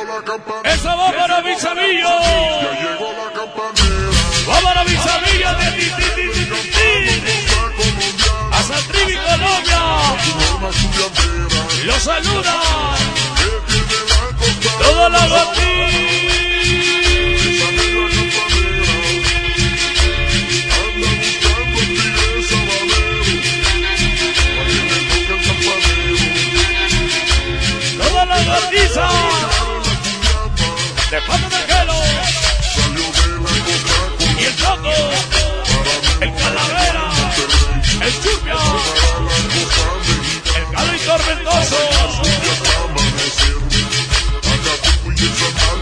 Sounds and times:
Music: 0.0 - 45.8.

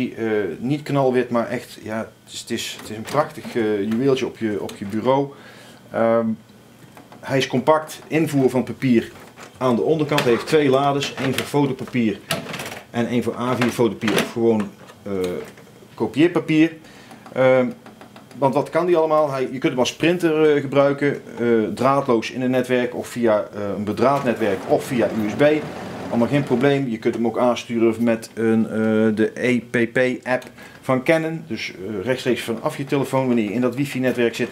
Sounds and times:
Speech: 0.0 - 6.4, 7.2 - 12.3, 12.9 - 16.8, 17.4 - 34.5.

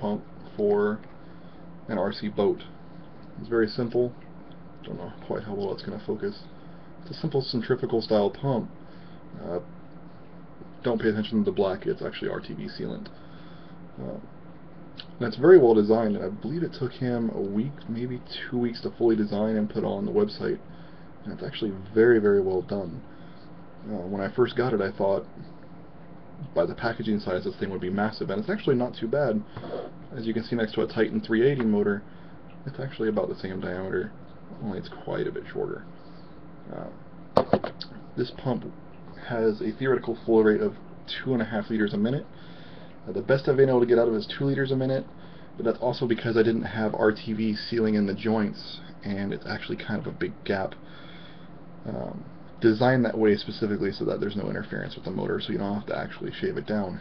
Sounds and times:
Speech: 0.0 - 1.1, 1.9 - 2.8, 3.4 - 4.2, 4.8 - 8.8, 9.4 - 9.7, 10.8 - 13.2, 14.0 - 14.3, 15.0 - 23.1, 23.8 - 25.5, 26.4 - 35.9, 36.7 - 37.0, 37.6 - 42.4, 43.1 - 50.8, 51.8 - 57.0.

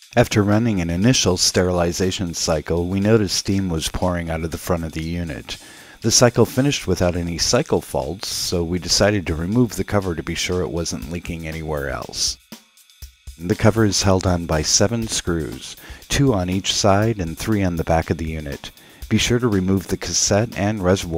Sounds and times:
Speech: 0.0 - 12.4, 13.4 - 21.1
Music: 0.0 - 21.1.

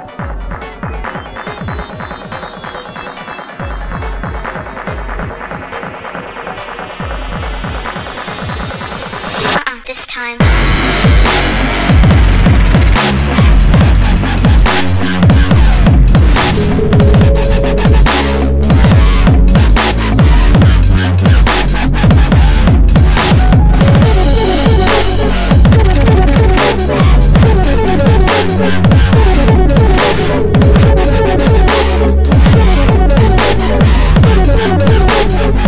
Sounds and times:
Dubstep: 0.1 - 35.6.

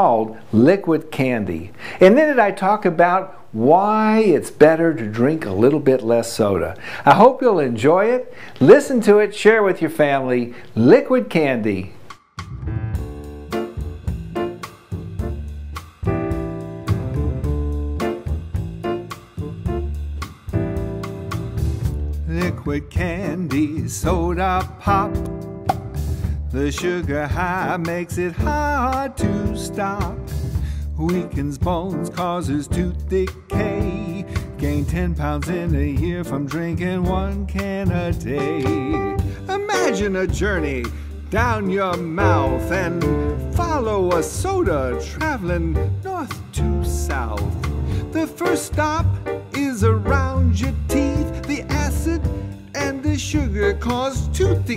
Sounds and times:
Speech: 0.0 - 12.0, 38.2 - 42.9, 43.6 - 47.5
Music: 11.9 - 54.7.

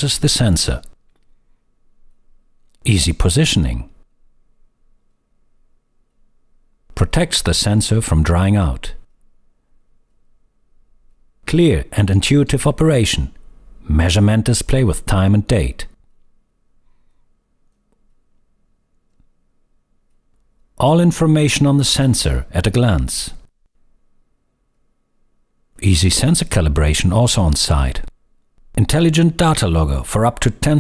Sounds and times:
Speech: 0.0 - 1.0, 2.8 - 4.0, 6.9 - 9.1, 11.5 - 16.0, 20.8 - 23.5, 25.8 - 28.1, 28.8 - 30.8.

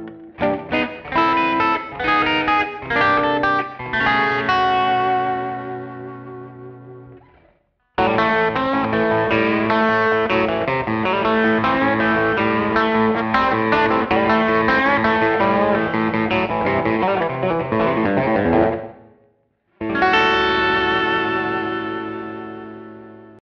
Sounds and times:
Guitar: 0.0 - 23.4.

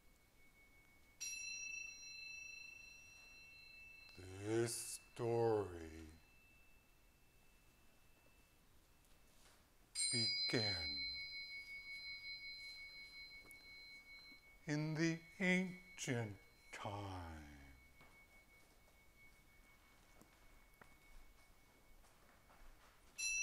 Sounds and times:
Speech: 4.2 - 6.2, 10.1 - 11.2, 14.7 - 17.8.

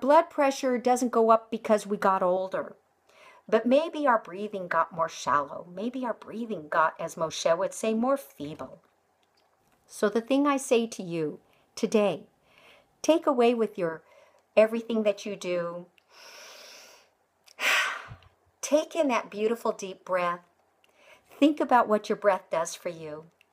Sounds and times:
Speech: 0.0 - 2.8, 3.5 - 8.8, 9.9 - 12.3, 13.1 - 14.0, 14.6 - 15.9, 18.6 - 20.5, 21.4 - 23.3
Breathing: 3.1 - 3.5, 12.4 - 13.0, 14.0 - 14.5, 16.1 - 18.2, 20.9 - 21.4.

